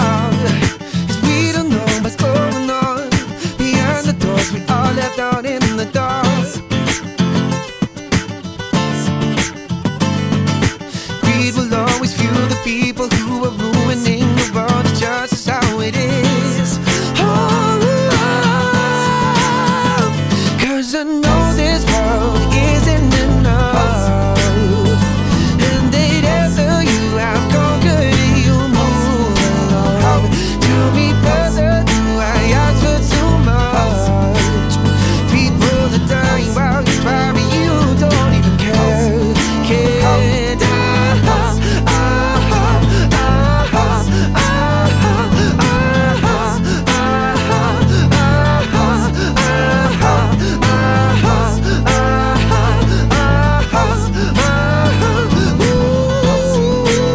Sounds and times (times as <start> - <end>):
Independent music: 0.0 - 57.1.